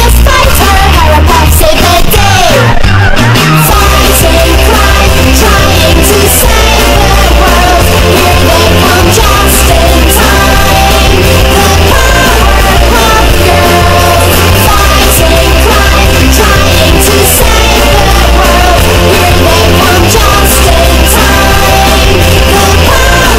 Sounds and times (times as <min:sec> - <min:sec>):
Punk rock: 0:00.0 - 0:23.3.